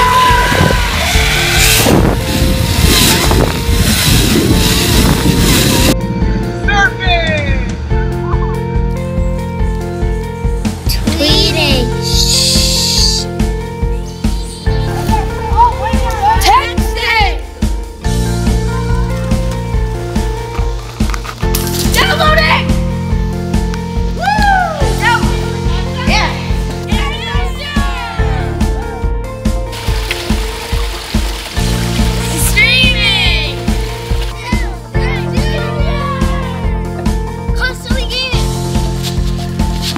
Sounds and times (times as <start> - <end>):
Music: 0.0 - 39.9.